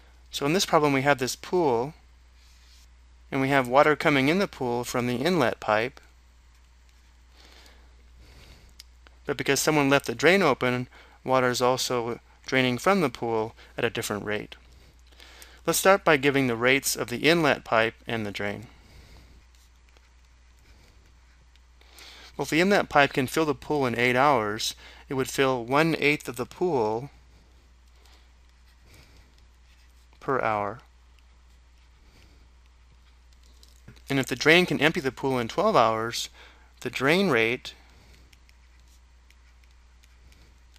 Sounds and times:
Speech: 0.3 - 2.0, 3.3 - 6.0, 9.3 - 14.6, 15.7 - 18.7, 22.4 - 27.1, 30.2 - 30.9, 34.1 - 37.8.

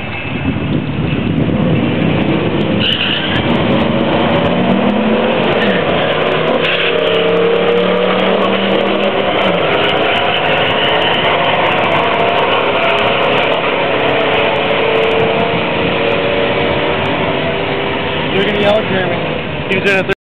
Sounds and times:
Speech: 18.4 - 20.2.

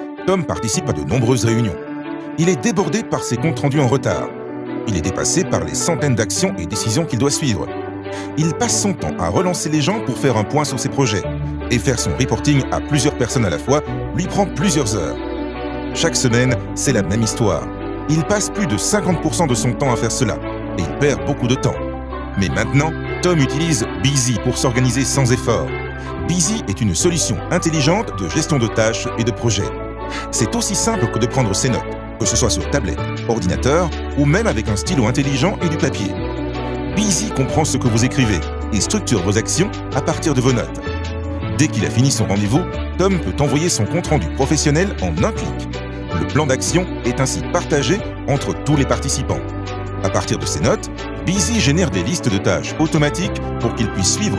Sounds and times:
Music: 0.0 - 54.3
Speech: 0.2 - 1.8, 2.4 - 4.3, 4.9 - 7.7, 8.3 - 15.2, 16.0 - 21.8, 22.4 - 36.2, 37.0 - 40.8, 41.5 - 45.6, 46.2 - 49.4, 50.0 - 54.3.

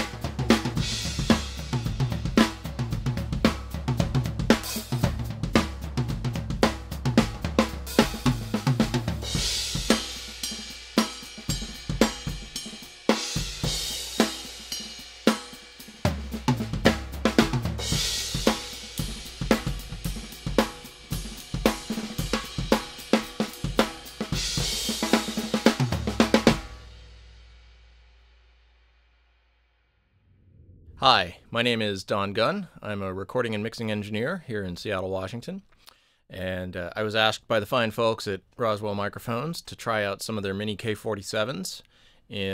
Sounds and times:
Bass drum: 0.0 - 12.8, 16.1 - 27.3
Snare drum: 0.0 - 26.9
Drum kit: 0.0 - 28.1.

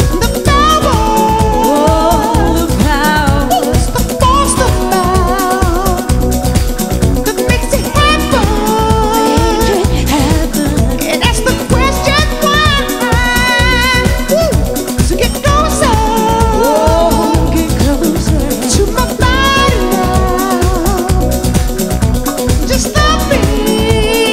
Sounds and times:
Dance music: 0.0 - 24.3.

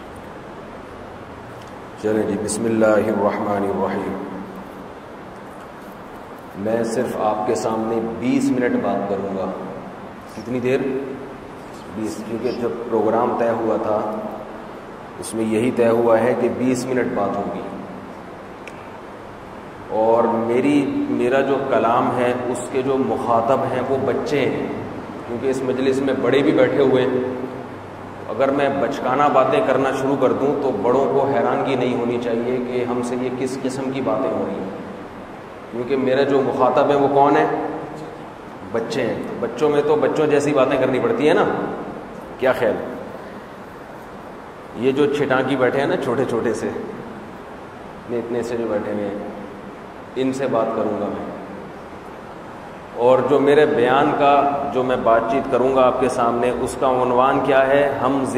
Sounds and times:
Speech: 2.0 - 4.3, 6.6 - 11.0, 11.7 - 14.3, 15.2 - 17.8, 19.9 - 27.3, 28.3 - 34.8, 35.7 - 37.8, 38.7 - 41.8, 42.4 - 42.9, 44.8 - 46.9, 48.1 - 49.4, 50.2 - 51.4, 53.0 - 58.3.

